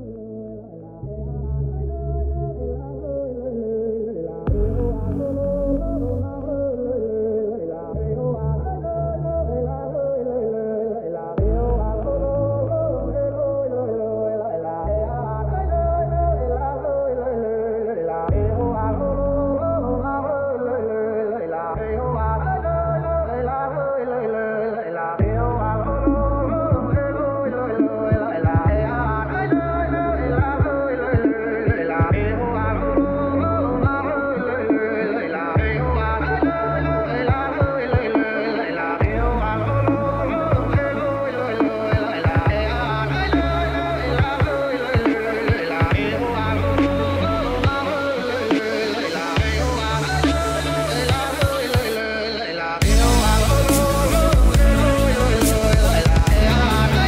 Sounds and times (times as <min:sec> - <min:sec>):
Dubstep: 0:04.5 - 0:06.6, 0:25.2 - 0:57.0.